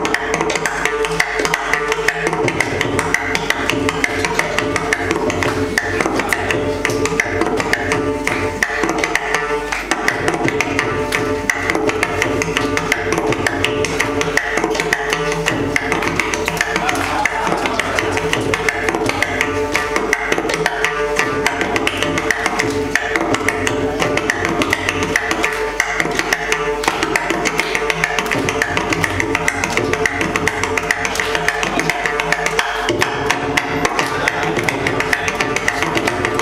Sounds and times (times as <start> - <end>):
Tabla: 0.0 - 36.4.